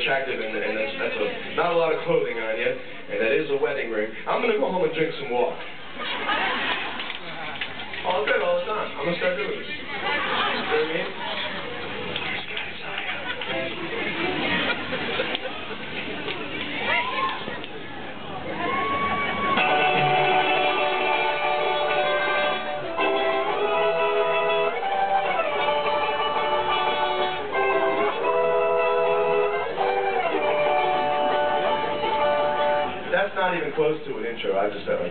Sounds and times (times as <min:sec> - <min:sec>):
Speech: 0:00.0 - 0:05.7, 0:08.0 - 0:14.2, 0:33.1 - 0:35.1.